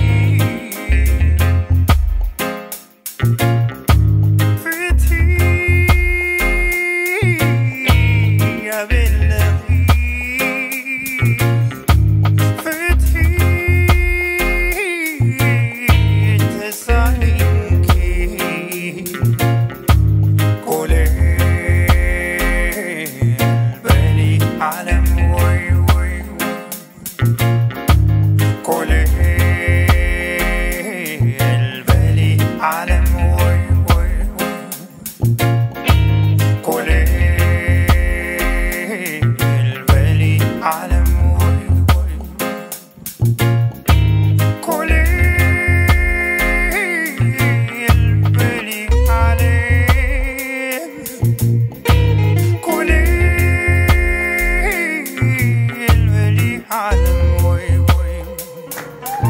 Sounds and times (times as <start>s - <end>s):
Reggae: 0.0s - 59.3s.